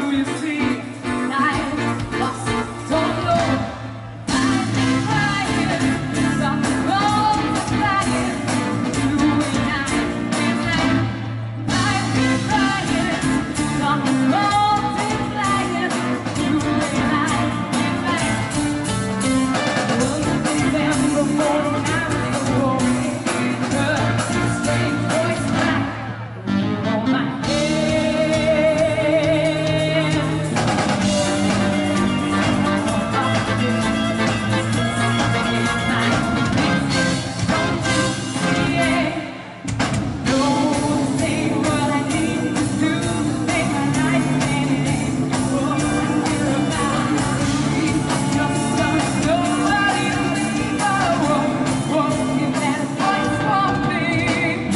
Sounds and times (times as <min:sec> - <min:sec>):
Music: 0:00.0 - 0:54.7.